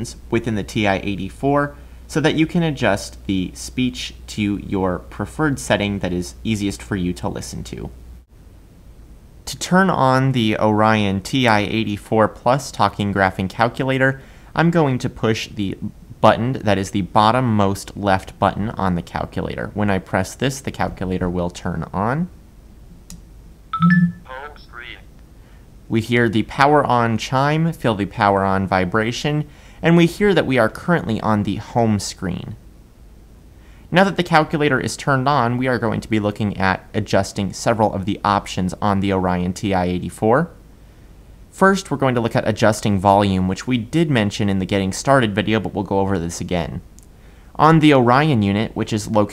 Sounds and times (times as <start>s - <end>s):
Male speech, man speaking: 0.0s - 8.0s, 9.5s - 22.3s, 24.3s - 25.1s, 25.9s - 32.6s, 33.9s - 40.6s, 41.6s - 46.8s, 47.6s - 49.3s
Narration, monologue: 0.0s - 49.3s.